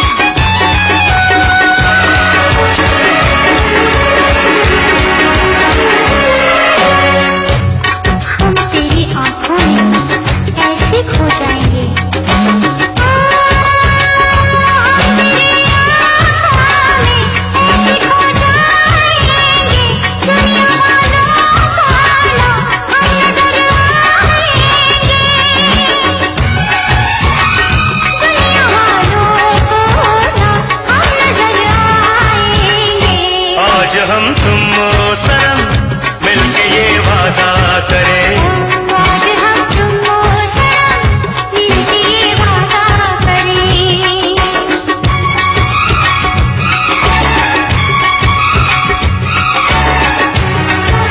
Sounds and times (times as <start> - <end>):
Music of Bollywood: 0.0 - 51.1.